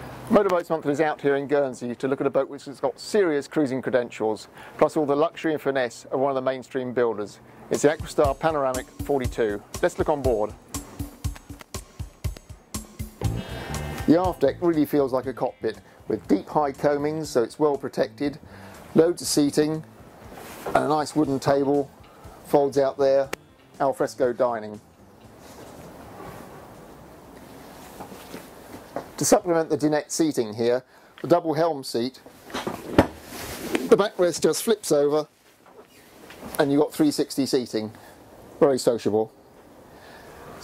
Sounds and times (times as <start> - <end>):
Speech: 0.3 - 10.6, 14.1 - 18.4, 19.0 - 19.9, 20.7 - 21.9, 22.5 - 24.8, 29.2 - 32.2, 33.8 - 35.3, 36.6 - 38.0, 38.6 - 39.4
Music: 7.8 - 26.9.